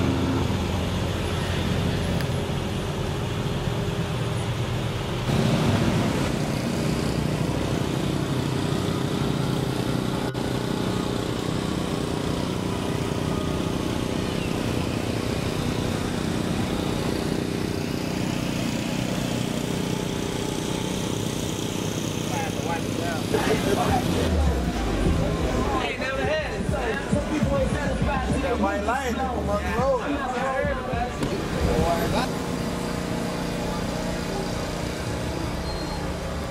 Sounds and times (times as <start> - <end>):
Car: 0.0 - 36.5
Traffic noise, roadway noise: 0.0 - 36.5.